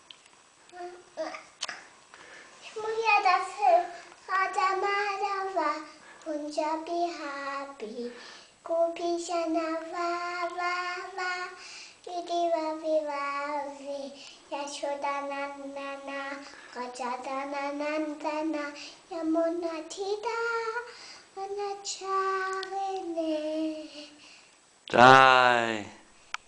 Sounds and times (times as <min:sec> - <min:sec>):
Child singing: 0:02.7 - 0:24.2.